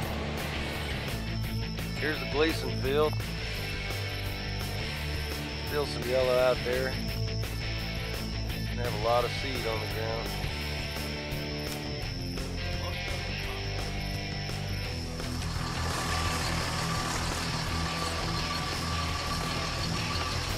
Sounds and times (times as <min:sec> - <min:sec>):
Music: 0:00.0 - 0:20.5
Speech: 0:02.0 - 0:03.2, 0:05.7 - 0:07.0, 0:08.8 - 0:10.3.